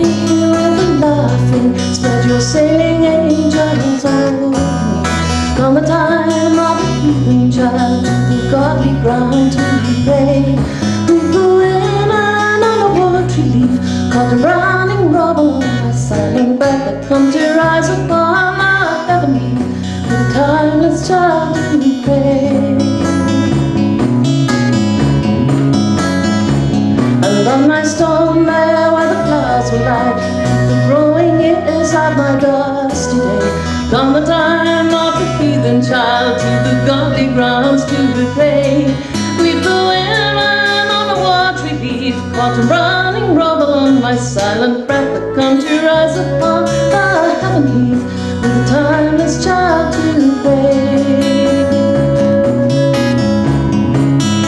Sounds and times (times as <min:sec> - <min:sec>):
Music: 0:00.0 - 0:54.4.